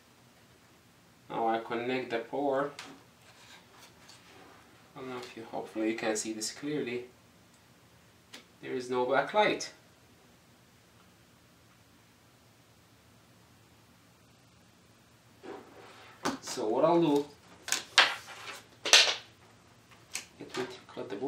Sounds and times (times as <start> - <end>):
Speech: 1.3 - 2.8, 5.0 - 7.1, 8.6 - 9.8, 16.3 - 17.4, 20.4 - 21.2.